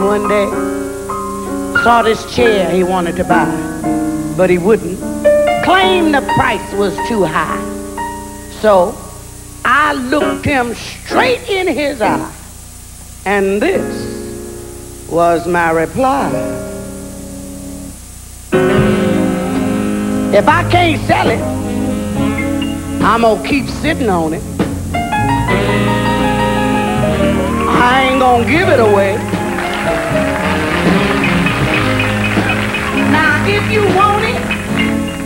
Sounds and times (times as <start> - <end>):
Music: 0.0 - 35.2
Speech: 1.8 - 3.5, 4.4 - 5.0, 5.6 - 7.7, 9.7 - 12.4, 13.2 - 14.2, 15.1 - 16.5, 20.3 - 21.5, 23.0 - 24.4.